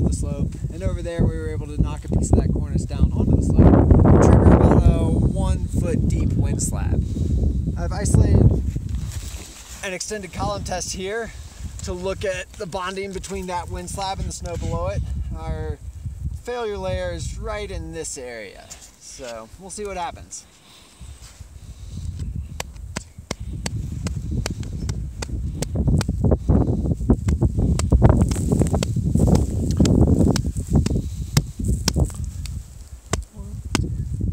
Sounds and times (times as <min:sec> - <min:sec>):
Wind noise (microphone): 0:00.0 - 0:18.1, 0:21.0 - 0:34.3.